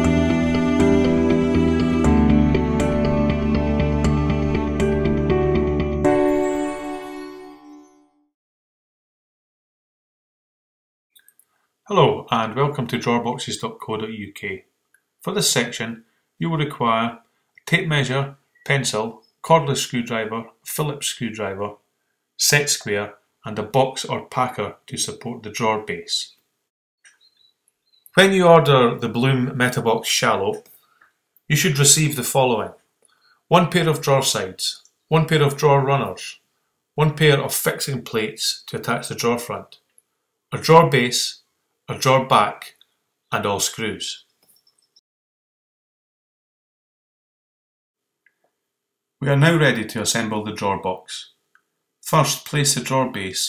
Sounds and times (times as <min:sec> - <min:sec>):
Speech: 0:11.9 - 0:21.8, 0:22.4 - 0:26.4, 0:28.2 - 0:30.7, 0:31.5 - 0:32.8, 0:33.5 - 0:36.4, 0:37.0 - 0:39.8, 0:40.6 - 0:44.3, 0:49.2 - 0:51.4, 0:52.0 - 0:53.4.